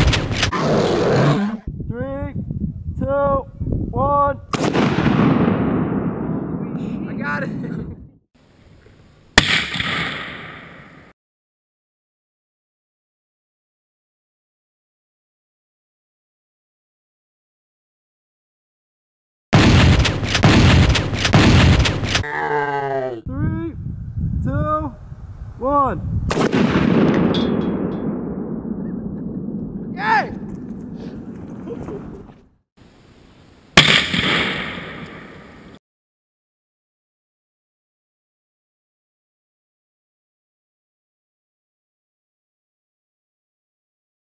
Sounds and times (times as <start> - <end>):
Outside, rural or natural: 0.0 - 11.2, 19.5 - 35.8
Speech: 1.9 - 2.4, 3.0 - 4.4, 6.8 - 8.0, 22.3 - 23.8, 24.4 - 25.0, 25.6 - 26.0, 30.0 - 30.4.